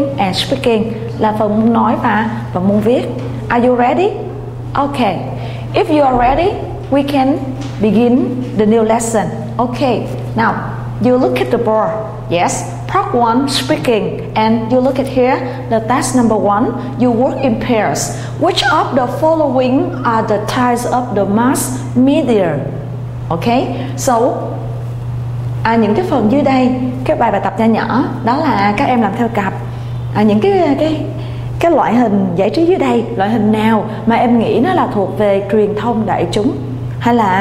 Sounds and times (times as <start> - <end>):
Speech: 0.0 - 24.6, 25.6 - 37.4.